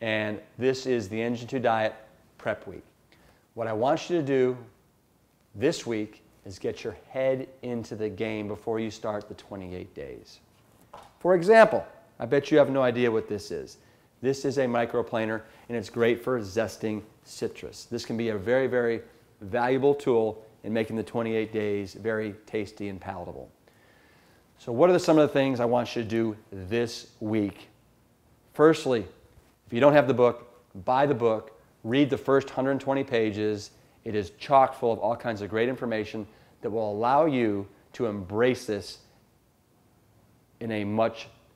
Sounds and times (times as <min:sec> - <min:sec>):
Speech: 0:00.0 - 0:02.9, 0:03.6 - 0:04.7, 0:05.6 - 0:10.5, 0:11.2 - 0:23.6, 0:24.6 - 0:27.8, 0:28.5 - 0:39.0, 0:40.6 - 0:41.4.